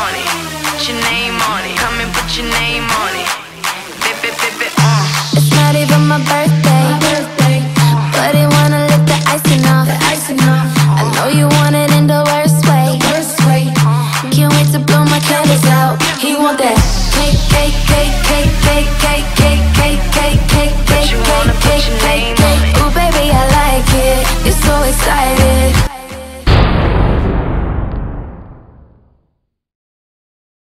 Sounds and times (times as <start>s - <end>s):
Music: 0.0s - 26.8s.